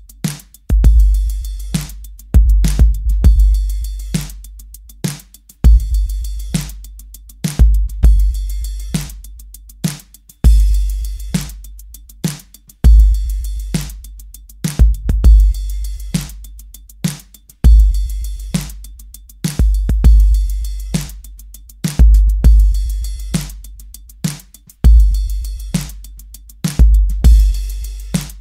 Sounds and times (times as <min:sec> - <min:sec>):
Music: 0:00.0 - 0:28.4.